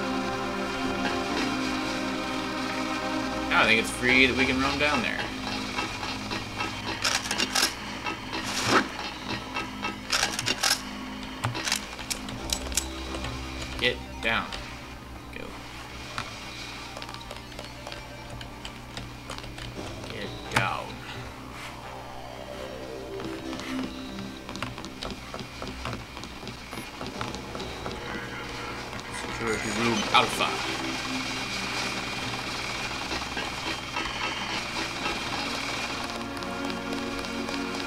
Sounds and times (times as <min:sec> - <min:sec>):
Music: 0:00.0 - 0:37.8.